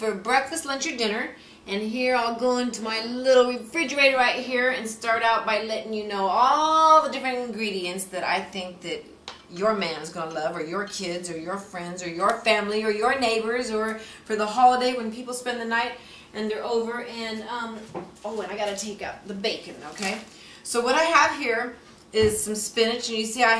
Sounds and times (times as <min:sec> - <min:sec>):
Speech: 0:00.0 - 0:23.5.